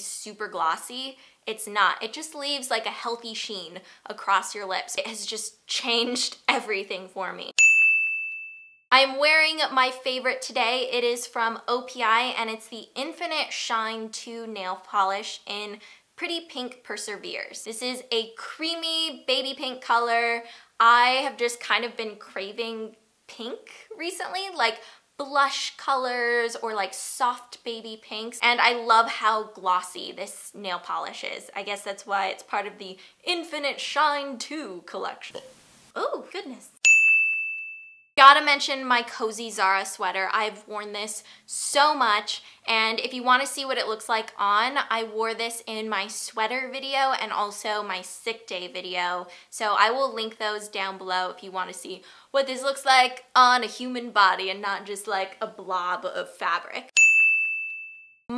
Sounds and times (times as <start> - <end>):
Ding: 7.6 - 8.9, 36.8 - 38.1, 57.0 - 58.3.